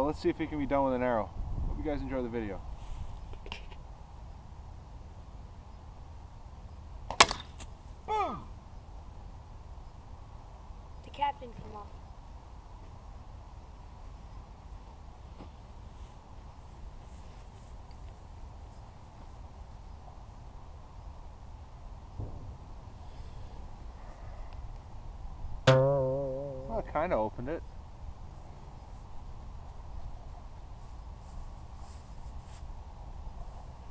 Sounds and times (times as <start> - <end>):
Speech: 0.0 - 2.6, 26.7 - 27.6.